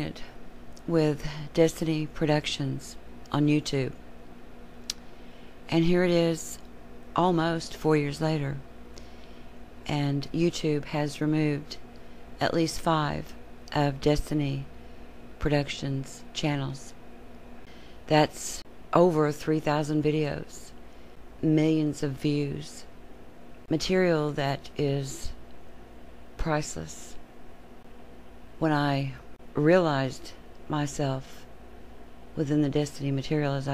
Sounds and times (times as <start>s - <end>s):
Female speech, woman speaking: 0.0s - 4.0s, 5.7s - 6.6s, 7.2s - 8.7s, 9.9s - 11.8s, 12.4s - 14.7s, 15.4s - 17.0s, 18.1s - 20.8s, 21.4s - 22.9s, 23.7s - 25.4s, 26.4s - 27.2s, 28.6s - 31.5s, 32.4s - 33.7s
Narration, monologue: 0.0s - 33.7s.